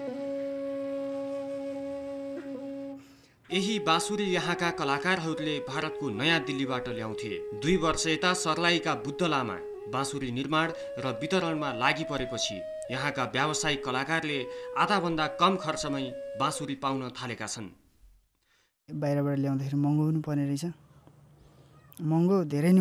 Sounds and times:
Music: 0.0s - 17.2s
Speech: 3.5s - 17.8s.

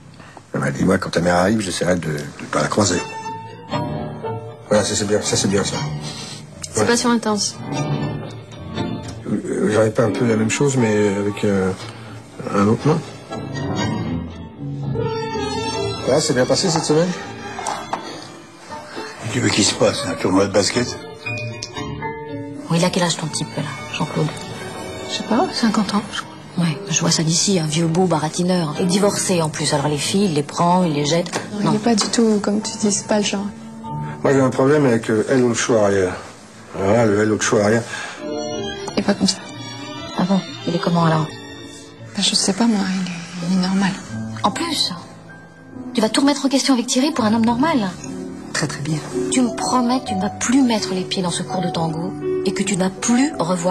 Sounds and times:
Music: 0.0s - 53.7s.

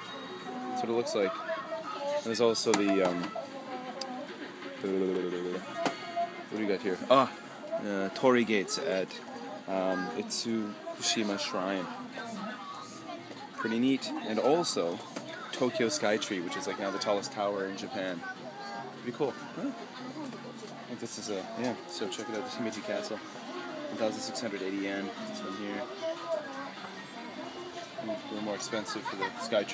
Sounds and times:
Inside, public space: 0.0s - 29.7s.

